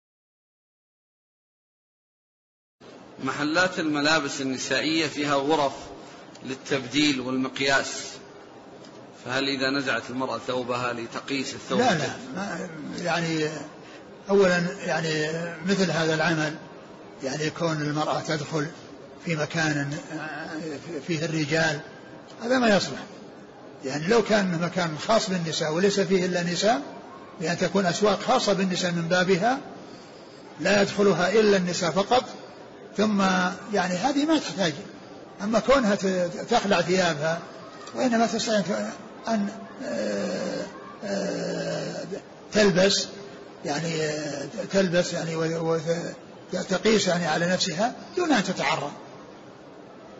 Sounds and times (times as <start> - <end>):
Speech: 3.2 - 8.3, 9.2 - 23.2, 23.8 - 29.7, 30.6 - 49.0.